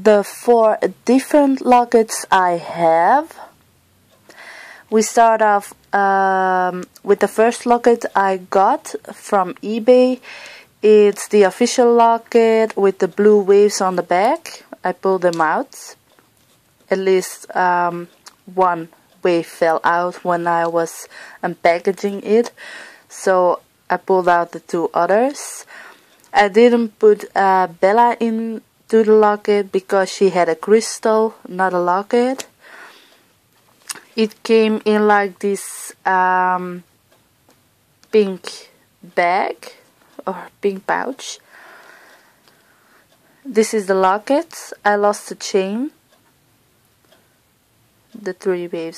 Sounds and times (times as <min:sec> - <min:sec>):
Speech: 0:00.0 - 0:03.5, 0:04.8 - 0:16.0, 0:16.9 - 0:25.7, 0:26.3 - 0:32.6, 0:33.9 - 0:36.9, 0:38.1 - 0:41.4, 0:43.5 - 0:46.0, 0:48.2 - 0:48.9.